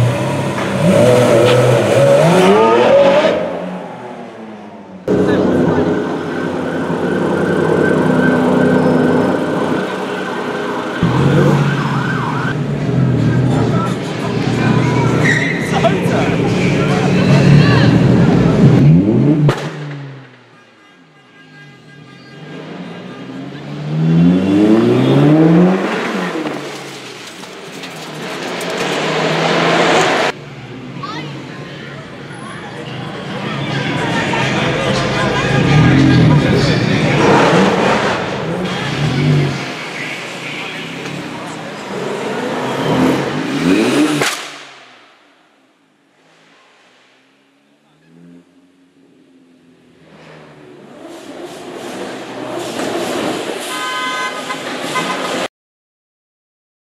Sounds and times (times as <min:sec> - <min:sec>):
Crowd: 0:05.0 - 0:45.3
Speech: 0:05.1 - 0:06.5, 0:13.2 - 0:18.7, 0:30.9 - 0:37.7, 0:38.5 - 0:42.0.